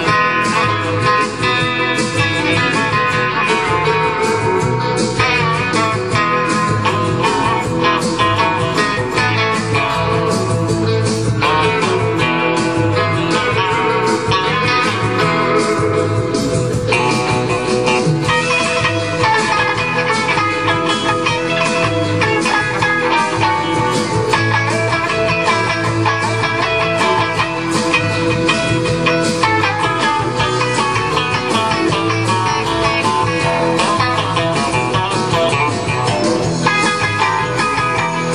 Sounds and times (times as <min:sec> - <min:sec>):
Electric guitar: 0:00.0 - 0:38.3.